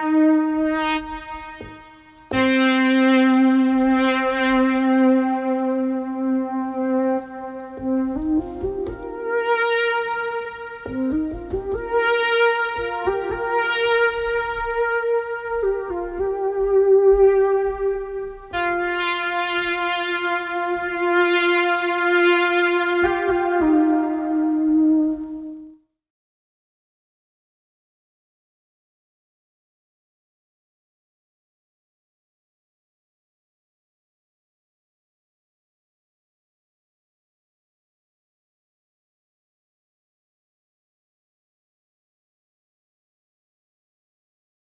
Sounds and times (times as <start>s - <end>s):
Synthesizer: 0.0s - 26.0s.